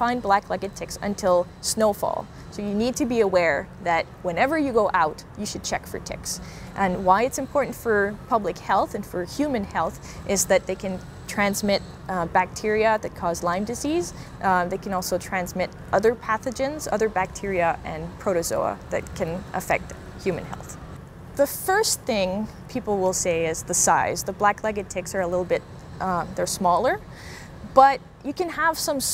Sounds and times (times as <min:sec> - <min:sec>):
Speech: 0:00.0 - 0:20.8, 0:21.4 - 0:27.0, 0:27.7 - 0:29.1.